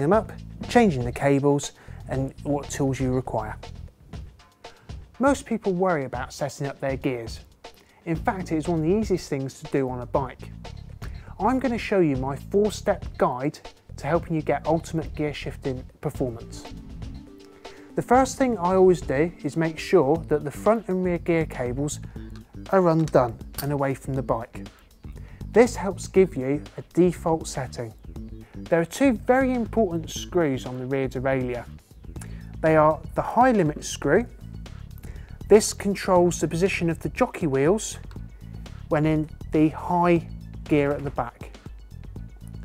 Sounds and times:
Speech: 0.0 - 3.6, 5.2 - 10.5, 11.3 - 16.7, 18.0 - 22.0, 22.7 - 24.7, 25.5 - 28.0, 28.7 - 31.7, 32.6 - 34.3, 35.5 - 38.0, 38.9 - 41.6
Music: 0.0 - 42.6.

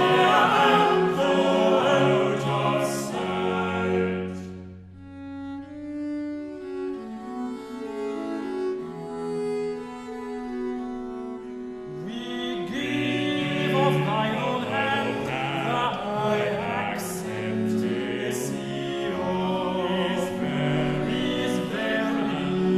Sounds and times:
Bowed string instrument: 0.0 - 22.7.

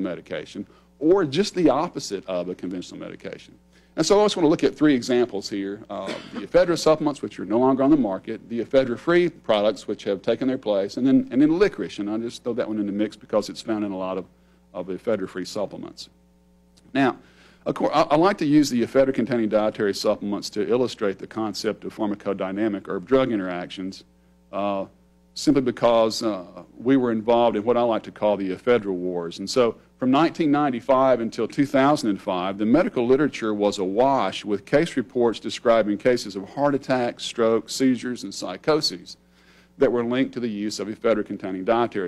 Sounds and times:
Speech: 0.0 - 16.2, 16.8 - 39.2, 39.8 - 42.0.

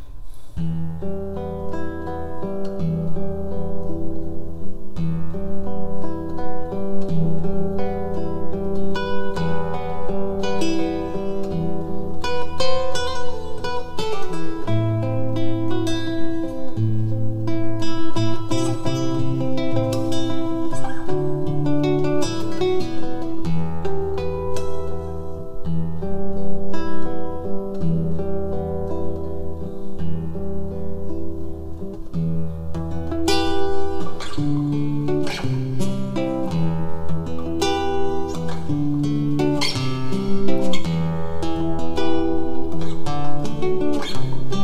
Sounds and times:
Acoustic guitar: 0.0 - 44.6
Strum: 0.0 - 44.6.

